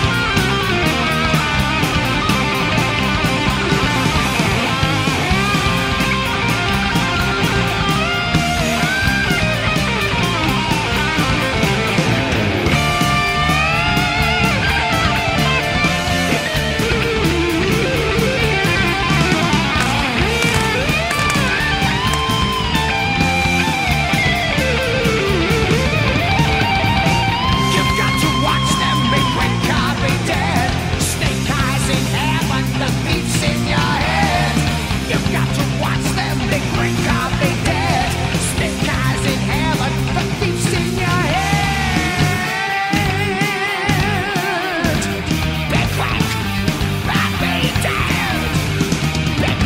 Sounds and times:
Punk rock: 0:00.0 - 0:49.6.

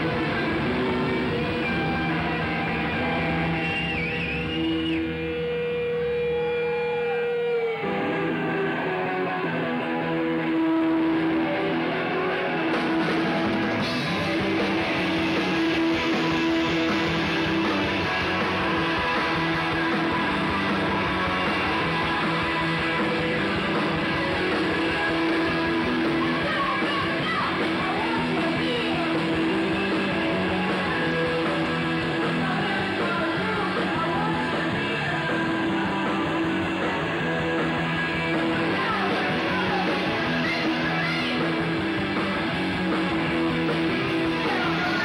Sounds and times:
Music: 0:00.0 - 0:45.0.

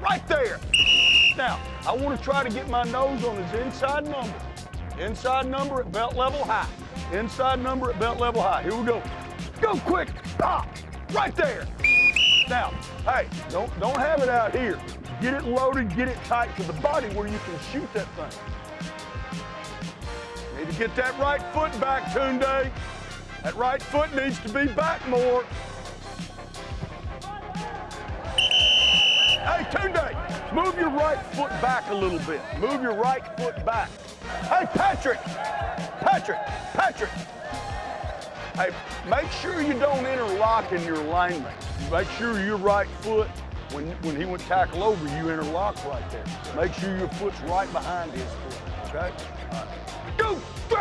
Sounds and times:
Music: 0:00.0 - 0:50.8
Speech: 0:01.4 - 0:04.4, 0:05.0 - 0:11.7, 0:12.5 - 0:18.3, 0:20.6 - 0:22.7, 0:23.4 - 0:25.5, 0:29.5 - 0:35.2, 0:36.0 - 0:37.2, 0:38.6 - 0:50.8.

